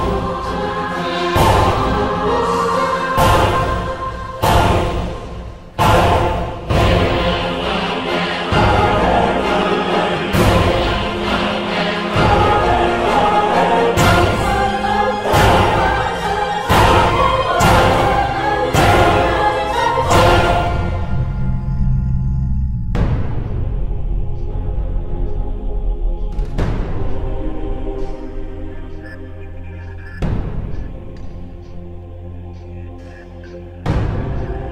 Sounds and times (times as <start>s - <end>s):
Scary music: 0.0s - 34.7s
Theme music: 0.0s - 34.7s.